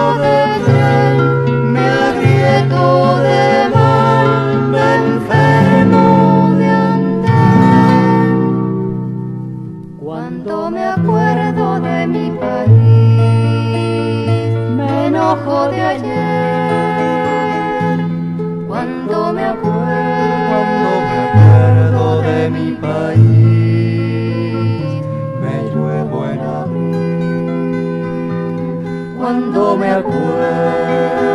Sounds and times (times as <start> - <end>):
Folk music: 0.0 - 31.3.